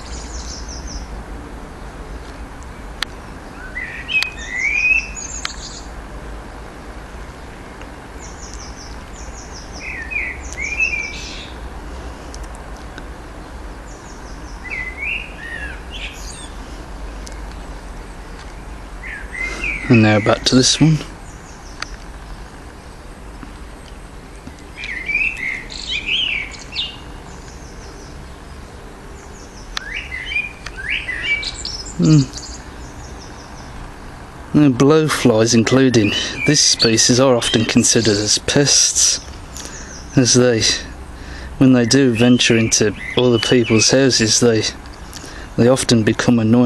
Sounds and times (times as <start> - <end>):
Chirp, tweet: 0.0 - 1.1, 2.1 - 5.9, 7.4 - 11.6, 13.4 - 16.6, 18.3 - 23.5, 24.4 - 33.8, 35.3 - 40.9, 41.6 - 46.6
Speech: 19.9 - 21.1, 32.0 - 32.4, 34.5 - 39.3, 40.2 - 41.0, 41.6 - 44.8, 45.6 - 46.6.